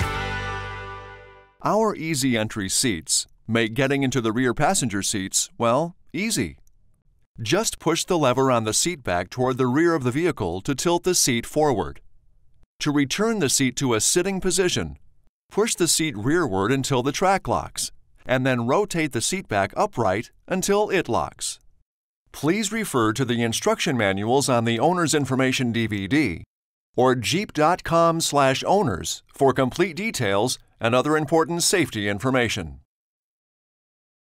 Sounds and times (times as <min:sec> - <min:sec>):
Speech: 0:01.6 - 0:06.6, 0:07.4 - 0:12.0, 0:12.8 - 0:21.6, 0:22.4 - 0:32.9.